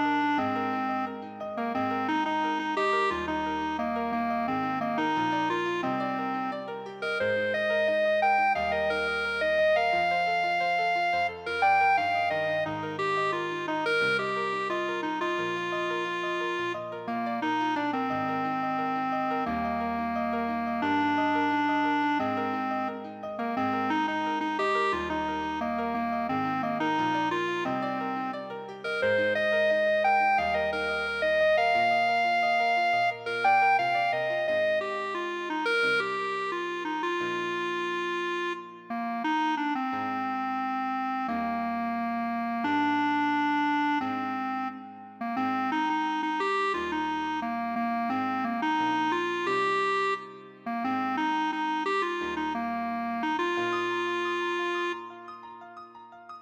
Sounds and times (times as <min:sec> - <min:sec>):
Musical instrument: 0:00.0 - 0:56.4.